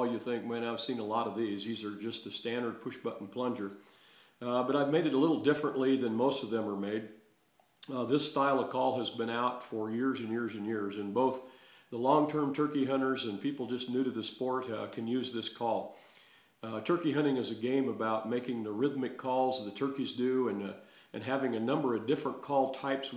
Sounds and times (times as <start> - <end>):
Speech: 0.0 - 3.8, 4.4 - 7.2, 7.8 - 15.9, 16.6 - 23.1.